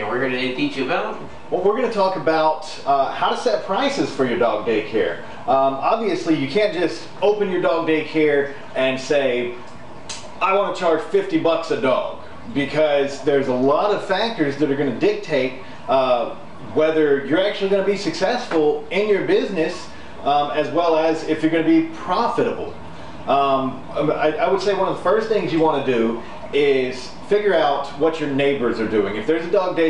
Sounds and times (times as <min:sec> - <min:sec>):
Speech: 0:00.0 - 0:09.6, 0:10.4 - 0:29.8.